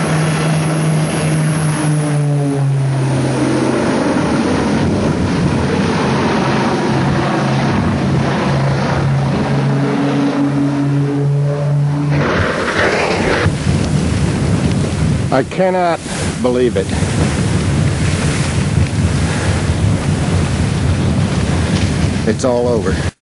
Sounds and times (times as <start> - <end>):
Wind noise (microphone): 0.0 - 23.2
Speech: 15.3 - 16.9, 22.2 - 23.1.